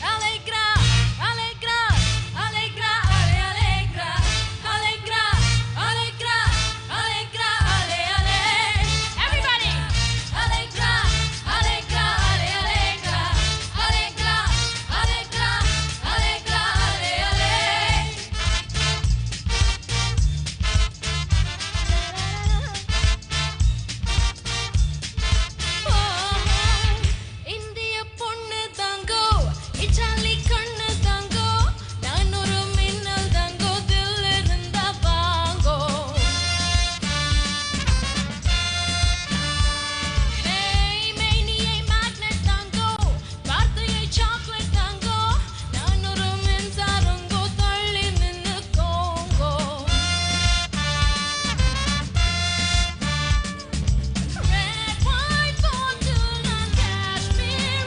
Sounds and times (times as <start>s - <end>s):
Music of Asia: 0.0s - 57.8s.